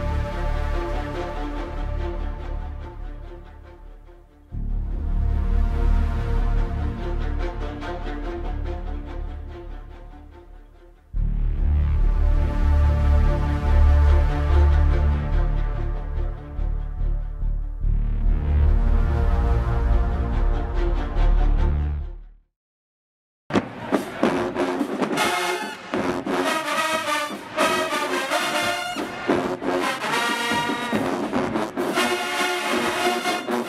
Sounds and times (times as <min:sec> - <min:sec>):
Music: 0:00.0 - 0:22.5, 0:23.5 - 0:33.6.